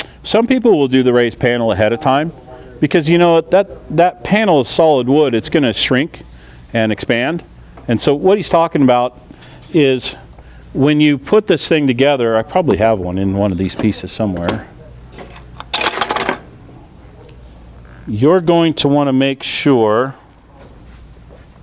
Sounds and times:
Speech: 0.3 - 6.2, 6.8 - 9.2, 9.8 - 10.2, 10.8 - 15.0, 18.1 - 20.3.

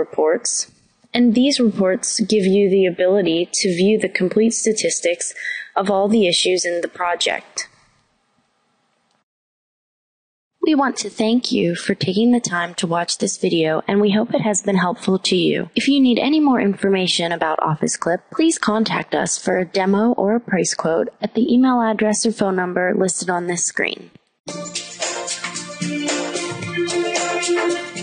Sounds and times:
Speech: 0.0 - 7.8, 10.6 - 24.2.

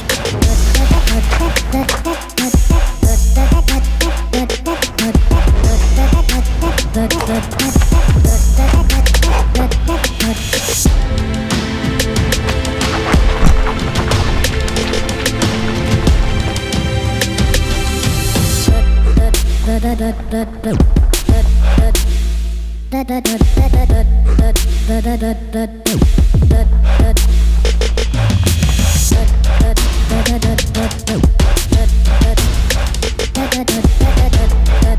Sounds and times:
Run: 0.0 - 11.2, 11.9 - 19.5
Music: 0.0 - 34.9
Outside, urban or manmade: 0.0 - 34.9.

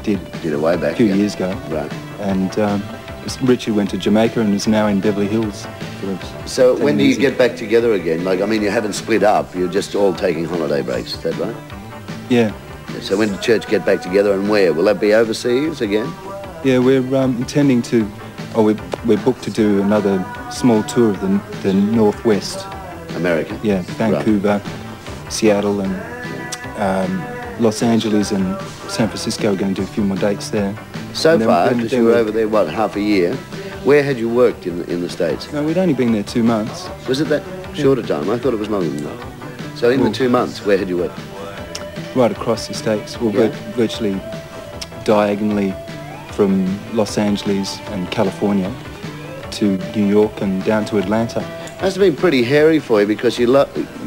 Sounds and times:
Speech: 0.0 - 11.6, 12.3 - 24.7, 25.3 - 41.2, 42.1 - 44.3, 44.9 - 48.8, 49.5 - 54.0
Music: 0.0 - 54.0.

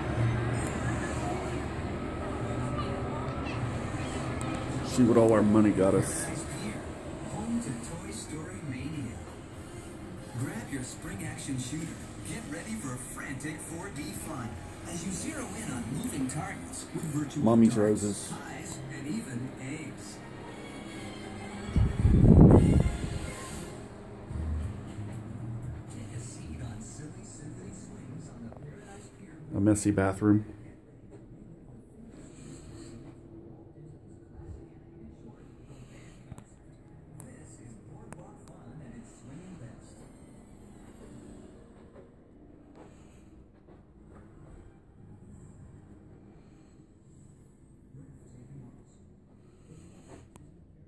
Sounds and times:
Music: 0.0 - 27.8
Speech: 2.6 - 9.4, 10.2 - 20.3, 25.9 - 40.3.

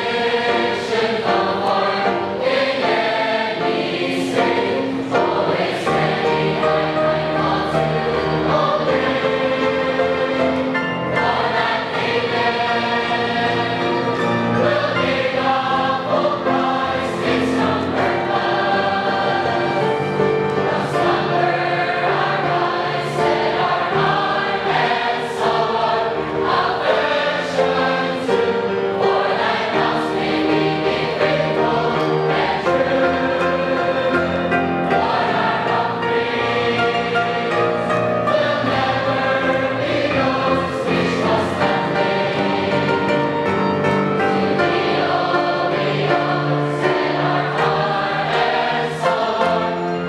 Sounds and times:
Choir: 0.0 - 50.0.

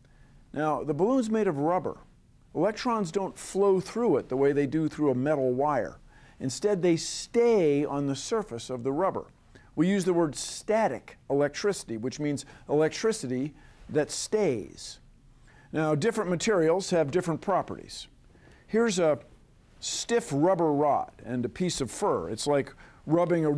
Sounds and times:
Speech: 0.5 - 15.0, 15.7 - 18.1, 18.7 - 23.5.

